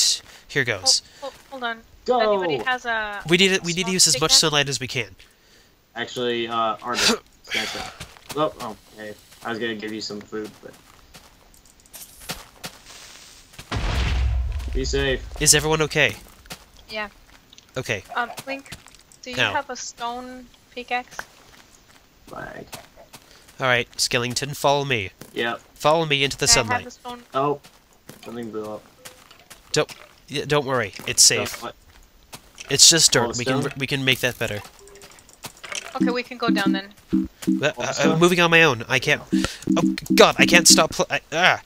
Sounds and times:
Speech: 0:00.0 - 0:05.1, 0:14.8 - 0:16.2, 0:19.3 - 0:21.2, 0:23.6 - 0:27.2, 0:30.3 - 0:31.7, 0:32.7 - 0:34.6, 0:36.0 - 0:36.9, 0:37.6 - 0:39.5, 0:40.1 - 0:41.6.

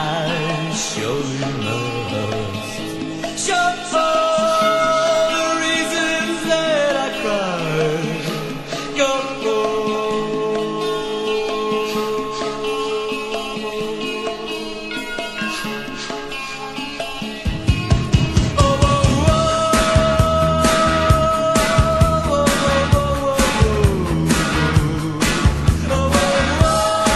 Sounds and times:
Music: 0:00.0 - 0:27.1.

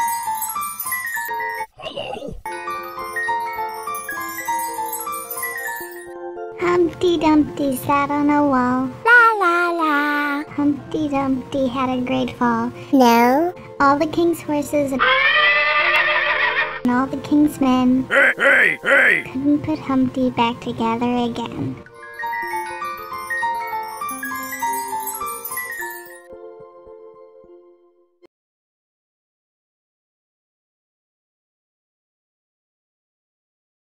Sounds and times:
Music: 0:00.0 - 0:28.3.

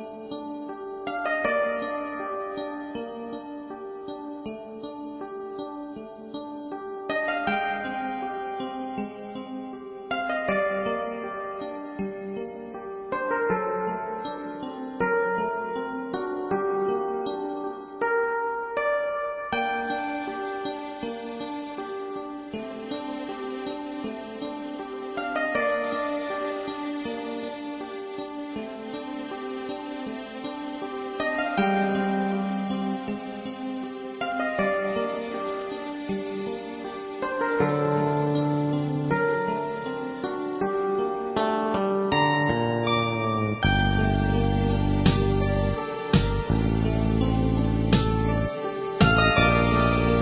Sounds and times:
Music: 0:00.0 - 0:50.2.

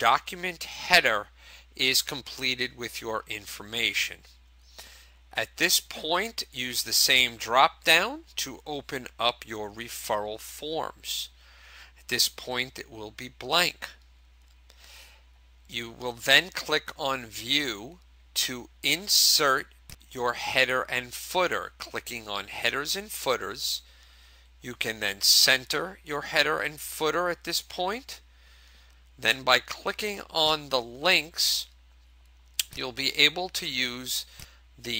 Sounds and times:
Speech: 0:00.0 - 0:04.3, 0:05.4 - 0:11.4, 0:12.1 - 0:14.0, 0:15.7 - 0:23.9, 0:24.6 - 0:28.2, 0:29.2 - 0:31.8, 0:32.6 - 0:34.9.

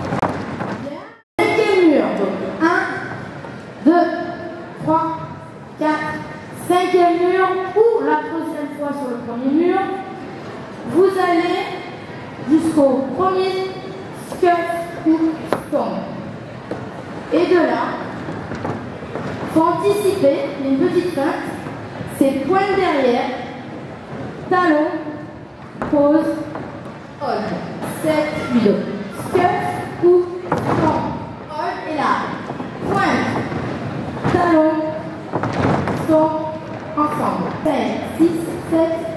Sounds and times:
Inside, large room or hall: 0:00.0 - 0:39.1
Speech: 0:00.8 - 0:10.2, 0:10.8 - 0:16.3, 0:17.3 - 0:18.2, 0:19.5 - 0:23.6, 0:24.5 - 0:25.2, 0:25.8 - 0:26.6, 0:27.2 - 0:33.5, 0:34.3 - 0:35.1, 0:36.0 - 0:39.1.

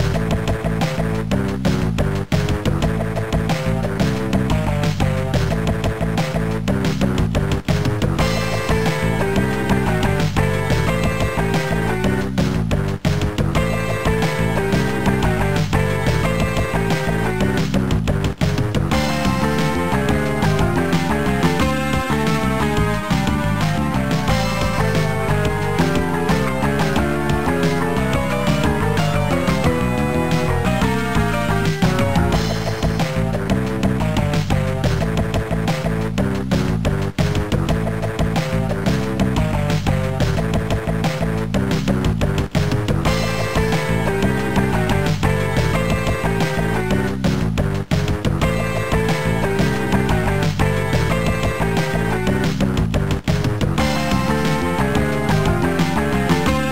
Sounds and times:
Soundtrack music: 0:00.0 - 0:56.7.

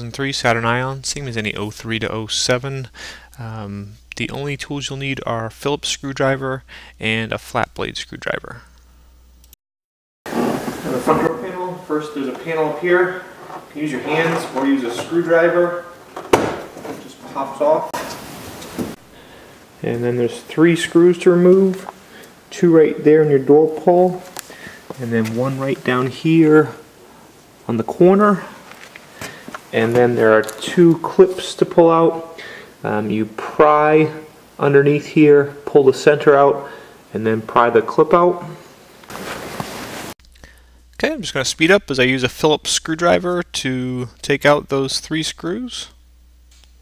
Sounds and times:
Speech: 0:00.0 - 0:08.7, 0:10.8 - 0:16.0, 0:16.9 - 0:18.0, 0:19.8 - 0:21.9, 0:22.5 - 0:24.4, 0:25.0 - 0:26.8, 0:27.7 - 0:28.6, 0:29.7 - 0:38.6, 0:41.0 - 0:46.0.

